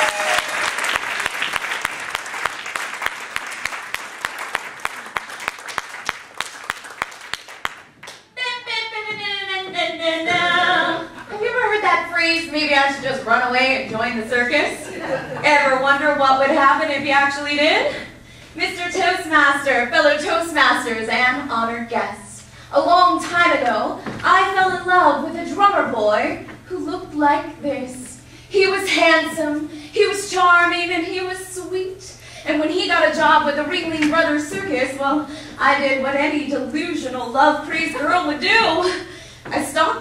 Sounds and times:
Female speech, woman speaking: 8.4s - 40.0s.

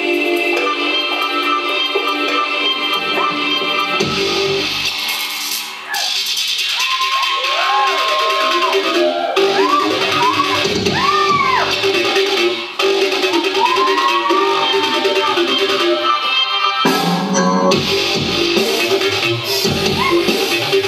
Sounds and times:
Dubstep: 0.0s - 20.8s.

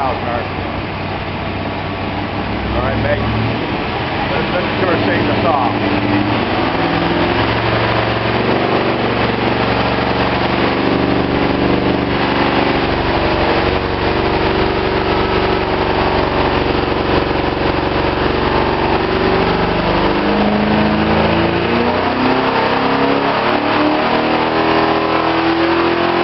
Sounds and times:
Engine: 0.0s - 26.2s.

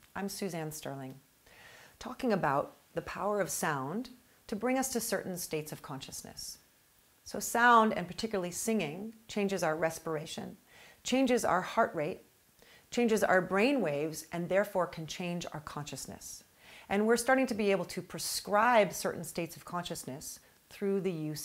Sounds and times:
Speech: 0.2s - 1.2s, 2.0s - 6.6s, 7.3s - 12.2s, 12.9s - 21.4s.

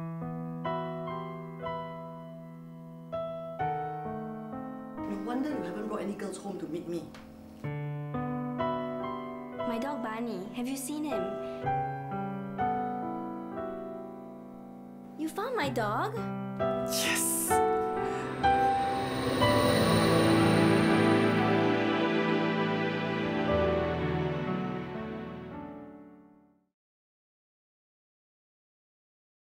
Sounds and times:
Electronica: 16.9s - 25.6s.

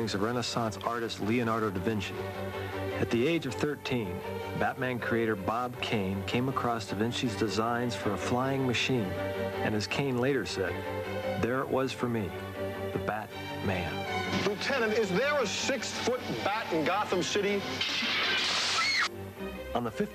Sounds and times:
Speech: 0.0s - 2.2s, 3.0s - 10.8s, 11.4s - 12.4s, 13.0s - 17.7s, 19.8s - 20.1s
Music: 0.0s - 20.1s.

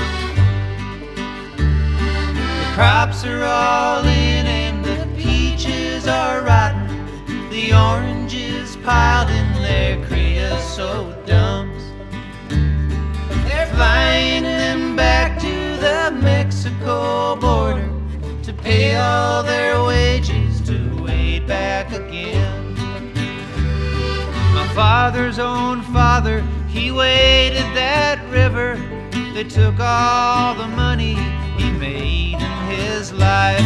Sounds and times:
Music: 0.0s - 33.6s.

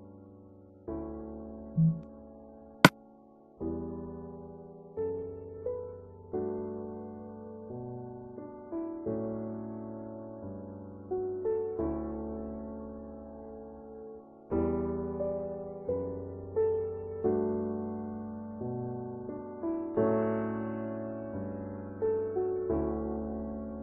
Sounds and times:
Music: 0.0s - 23.8s.

